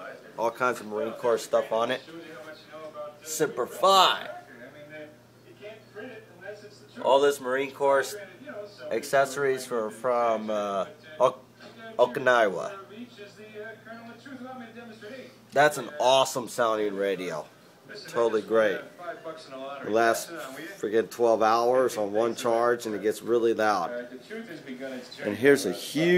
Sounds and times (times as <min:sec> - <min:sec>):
Speech: 0:00.0 - 0:26.1.